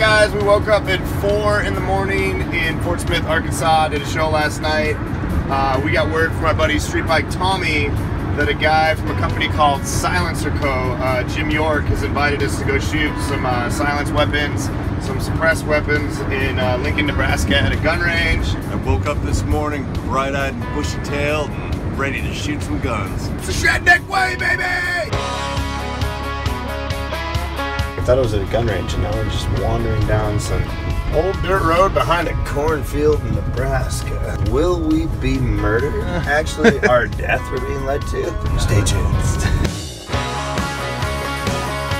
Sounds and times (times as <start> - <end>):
Speech: 0.0 - 25.1, 28.0 - 39.7
Music: 0.0 - 42.0.